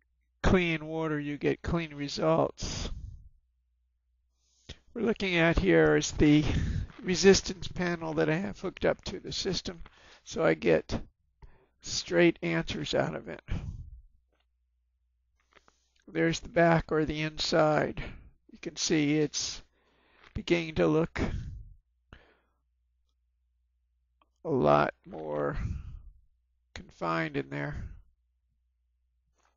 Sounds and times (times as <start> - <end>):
Speech: 0.4 - 3.1, 5.0 - 11.1, 11.8 - 13.8, 16.1 - 19.7, 20.4 - 21.6, 24.5 - 26.0, 26.8 - 28.0.